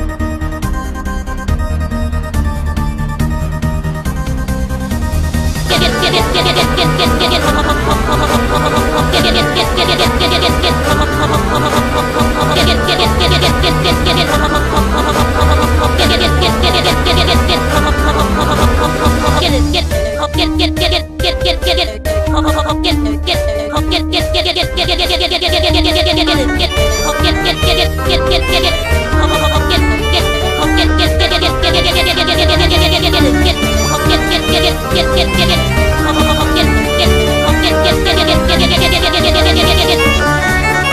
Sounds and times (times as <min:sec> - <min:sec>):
Music: 0:00.0 - 0:40.9.